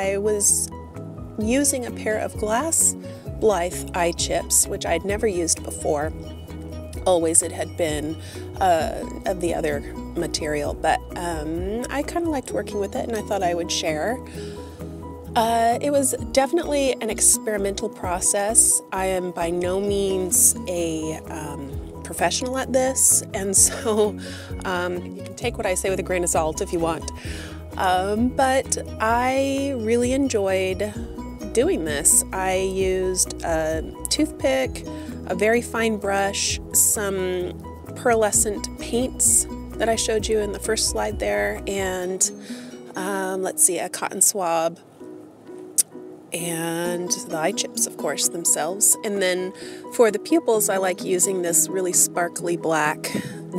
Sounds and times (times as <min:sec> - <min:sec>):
Speech: 0:00.0 - 0:00.7, 0:01.4 - 0:06.1, 0:07.0 - 0:14.2, 0:15.4 - 0:27.1, 0:27.8 - 0:42.3, 0:43.0 - 0:44.8, 0:46.4 - 0:53.5
Music: 0:00.0 - 0:53.5.